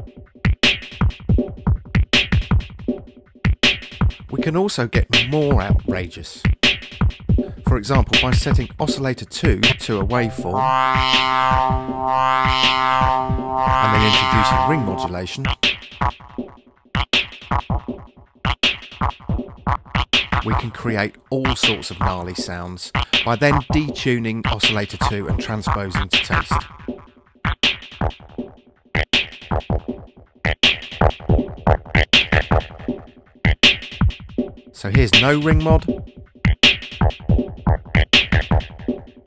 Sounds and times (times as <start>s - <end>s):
Speech: 4.3s - 6.5s, 7.6s - 10.7s, 13.8s - 15.5s, 20.4s - 26.6s, 34.8s - 35.9s
Synthesizer: 9.7s - 15.6s.